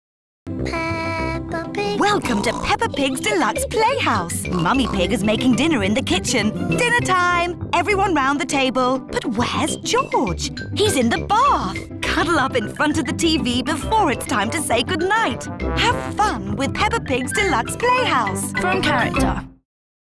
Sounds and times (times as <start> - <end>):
Music: 0.5 - 19.6
Speech: 1.8 - 19.4.